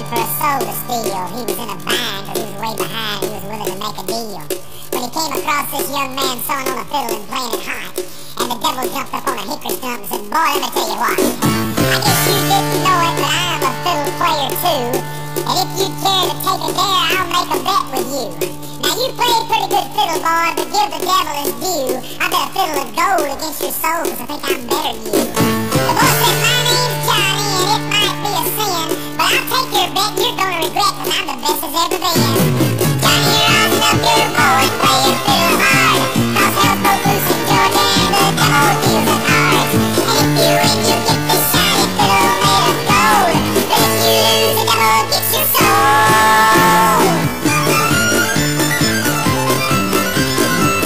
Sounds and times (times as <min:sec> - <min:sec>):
Music: 0:00.0 - 0:50.8.